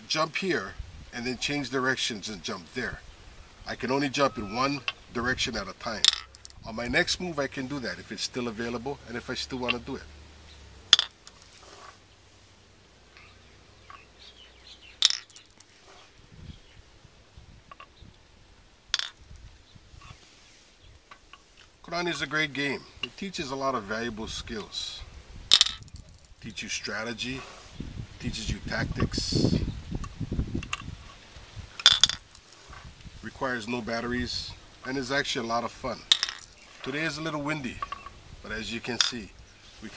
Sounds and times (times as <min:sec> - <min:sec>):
Speech: 0:00.0 - 0:03.0, 0:03.7 - 0:10.0, 0:21.8 - 0:25.1, 0:26.4 - 0:27.5, 0:28.2 - 0:29.6, 0:33.2 - 0:36.1, 0:36.8 - 0:39.9
Outside, rural or natural: 0:00.0 - 0:39.9.